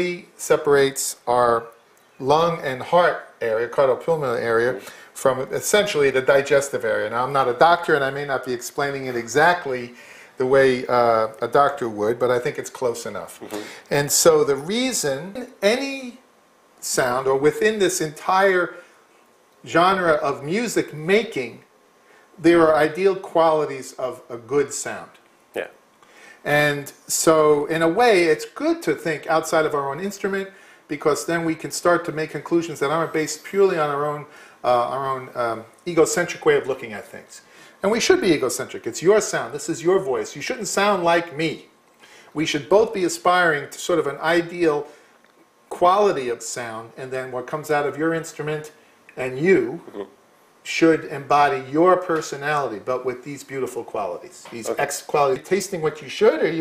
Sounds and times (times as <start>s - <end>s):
Speech: 0.0s - 18.8s, 19.6s - 21.7s, 22.4s - 25.8s, 26.4s - 41.7s, 42.4s - 44.9s, 45.7s - 56.6s.